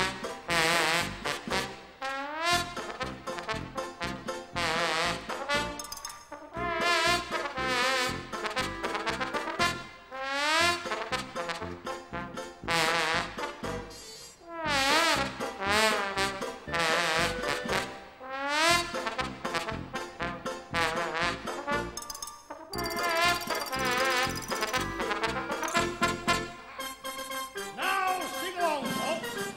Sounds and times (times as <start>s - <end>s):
Soundtrack music: 2.5s - 14.0s, 14.6s - 29.5s.